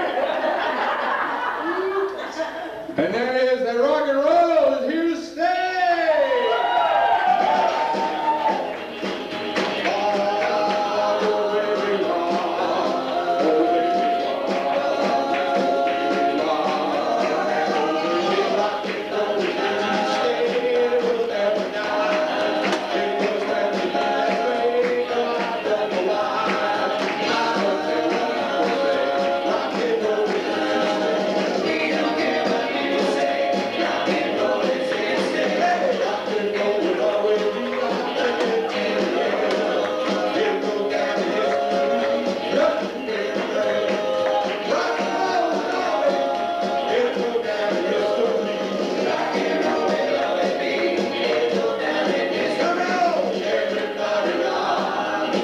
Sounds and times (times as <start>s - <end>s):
Rock and roll: 3.0s - 55.4s.